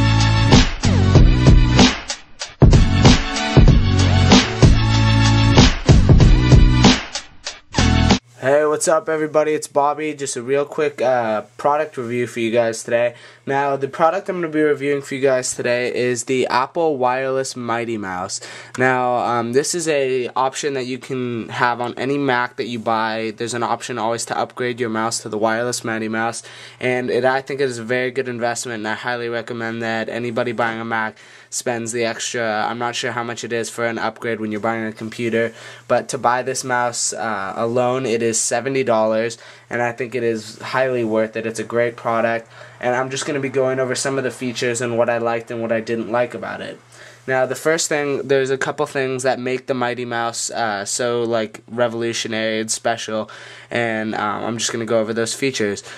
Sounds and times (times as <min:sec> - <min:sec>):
Speech: 0:08.4 - 0:55.9.